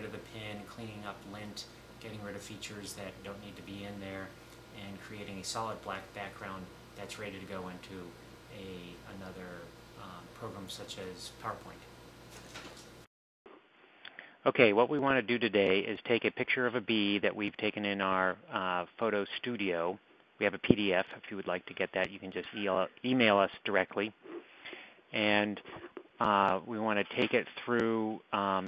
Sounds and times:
Speech: 0.0s - 11.9s, 14.4s - 24.2s, 25.2s - 28.6s.

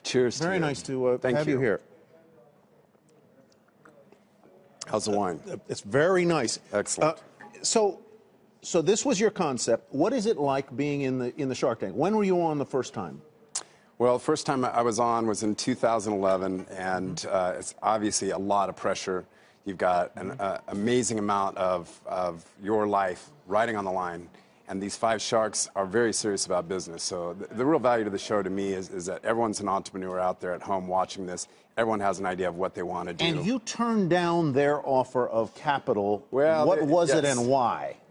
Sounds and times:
Speech: 14.0s - 38.0s.

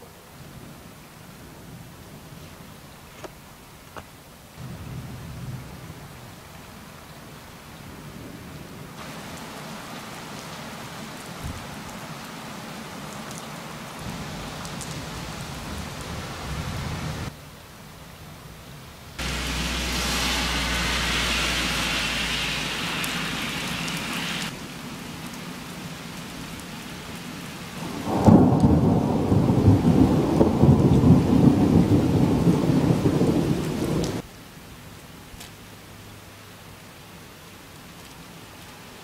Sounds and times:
Rain on surface: 0.0s - 39.0s
Thunder: 27.8s - 34.2s.

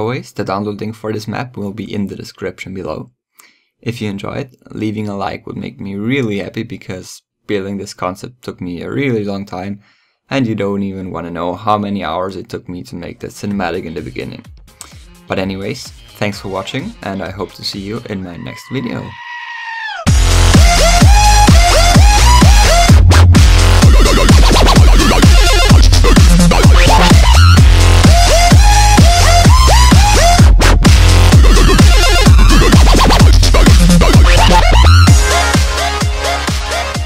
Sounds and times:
Dubstep: 20.1s - 37.0s.

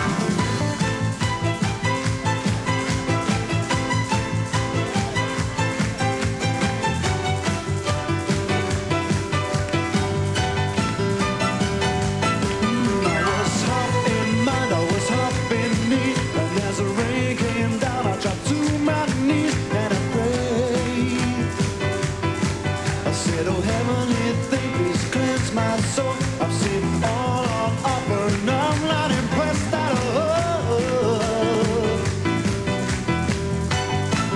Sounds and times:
Music: 0.0s - 34.3s.

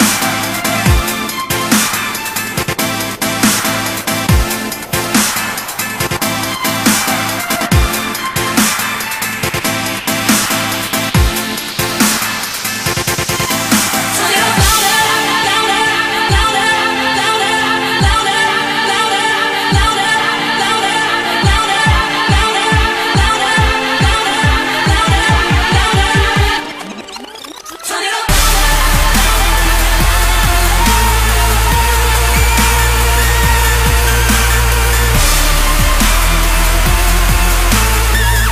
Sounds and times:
Dubstep: 0.0s - 38.5s.

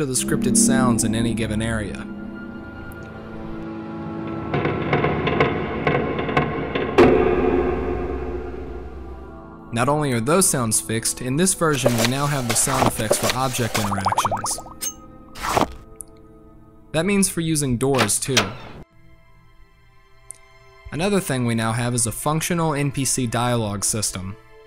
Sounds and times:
Speech: 0.0s - 2.1s, 9.7s - 14.6s, 16.9s - 18.6s, 20.9s - 24.4s
Music: 0.0s - 24.6s.

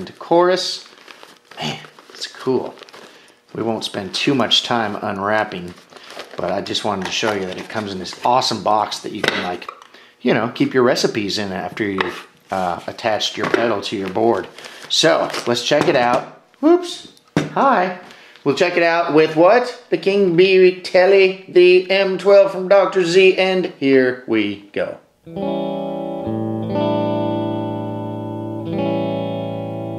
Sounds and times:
Speech: 0.0s - 0.9s, 1.6s - 2.8s, 3.5s - 5.8s, 6.4s - 25.1s
Guitar: 25.2s - 29.9s.

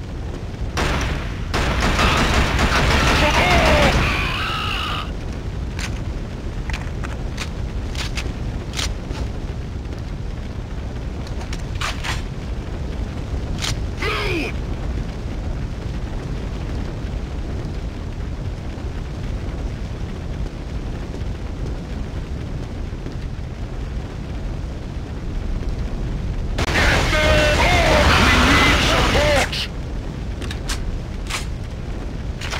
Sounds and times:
Speech: 3.2s - 4.4s, 14.0s - 14.6s, 26.7s - 29.7s.

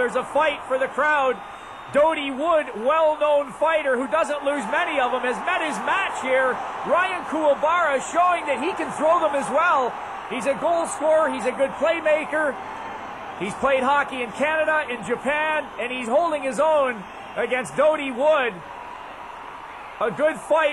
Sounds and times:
Speech: 0.0s - 12.6s, 13.4s - 18.6s, 20.0s - 20.7s.

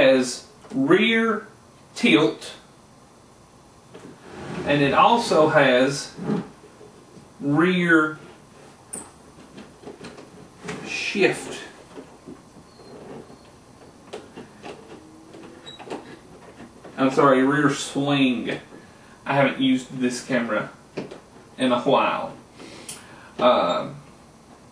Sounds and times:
Speech: 0.0s - 2.7s, 4.6s - 6.2s, 7.4s - 8.3s, 10.8s - 11.8s, 17.0s - 20.8s, 21.6s - 22.4s, 23.4s - 24.0s.

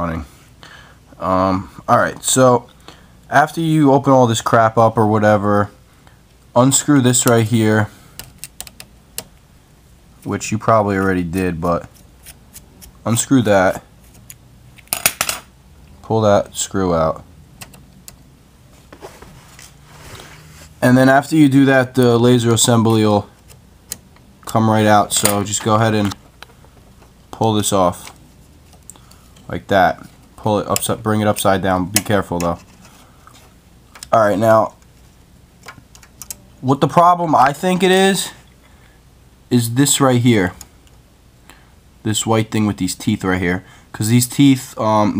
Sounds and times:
Speech: 0.0s - 0.3s, 1.2s - 2.7s, 3.3s - 5.8s, 6.6s - 8.0s, 10.2s - 11.9s, 13.0s - 13.9s, 16.0s - 17.3s, 20.8s - 23.3s, 24.4s - 26.2s, 27.3s - 28.2s, 29.5s - 32.6s, 34.0s - 34.8s, 36.6s - 38.4s, 39.5s - 40.6s, 42.0s - 45.1s.

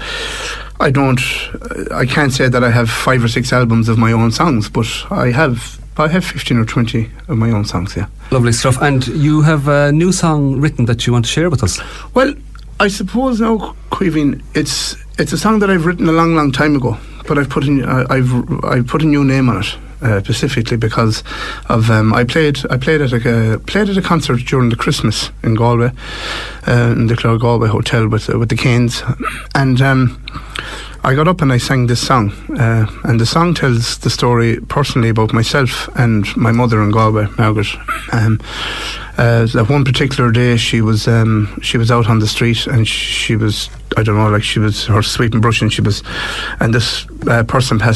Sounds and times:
Speech: 0.7s - 26.0s, 26.6s - 30.4s, 31.0s - 38.4s, 39.1s - 47.9s.

